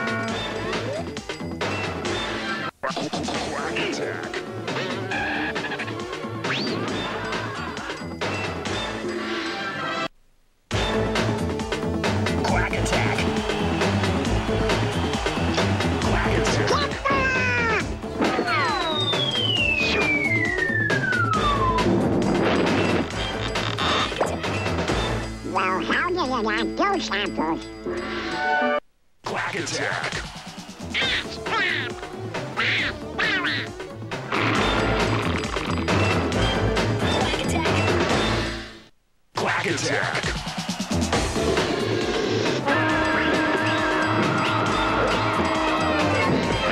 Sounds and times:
Music: 0.0 - 10.1, 10.7 - 38.9, 39.5 - 46.7
Speech: 2.8 - 4.3, 16.1 - 17.8, 25.5 - 27.6, 29.2 - 30.2, 39.4 - 40.2.

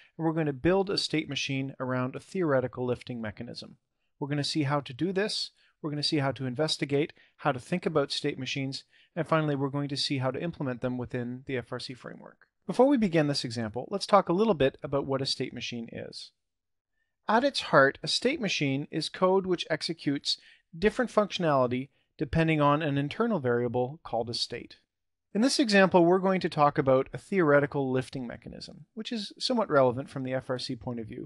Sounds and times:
Speech: 0.0 - 16.4, 17.3 - 24.8, 25.4 - 31.2.

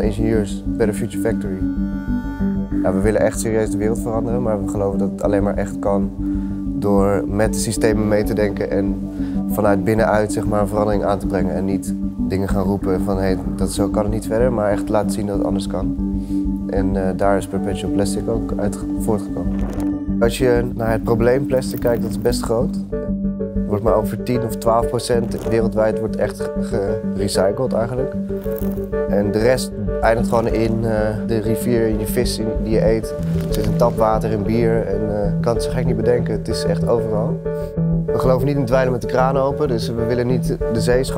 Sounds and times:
Speech: 0.0 - 1.7, 2.8 - 6.1, 6.8 - 16.0, 16.7 - 19.5, 20.2 - 22.8, 23.7 - 28.2, 29.1 - 37.4, 38.2 - 41.1
Music: 0.0 - 41.1.

